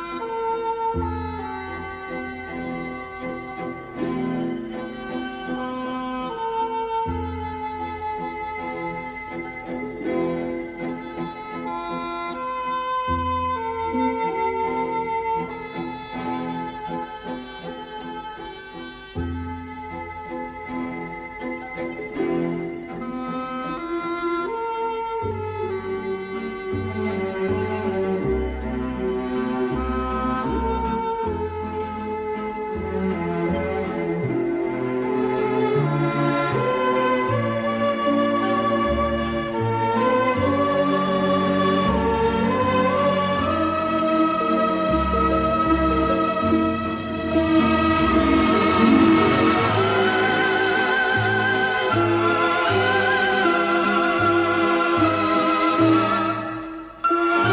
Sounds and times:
Tender music: 0.0 - 57.5.

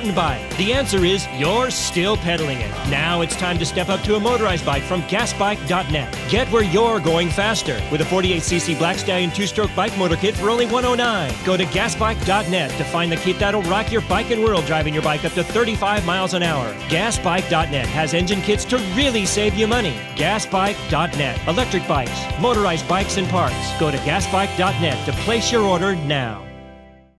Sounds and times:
Speech: 0.0 - 26.5
Music: 0.0 - 27.1.

